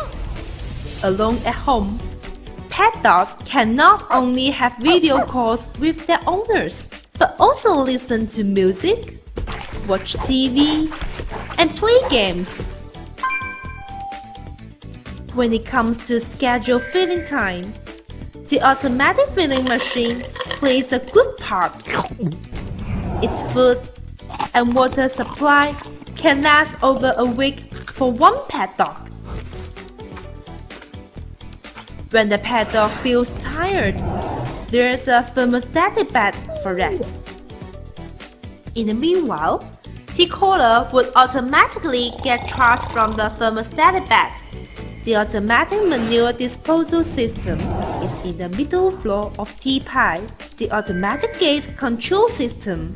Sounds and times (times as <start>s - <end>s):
Music: 0.0s - 52.9s
Speech: 1.0s - 2.0s, 2.7s - 9.1s, 9.8s - 11.0s, 11.6s - 12.7s, 15.4s - 17.8s, 18.5s - 22.4s, 23.2s - 23.9s, 24.5s - 29.0s, 32.1s - 34.0s, 34.7s - 37.2s, 38.8s - 44.5s, 45.1s - 52.9s.